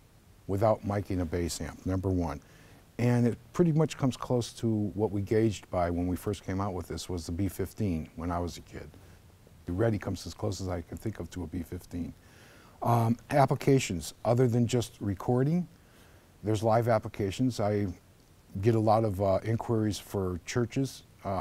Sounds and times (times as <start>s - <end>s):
Speech: 0.5s - 2.4s, 3.0s - 9.0s, 9.6s - 12.2s, 12.8s - 15.8s, 16.4s - 21.4s.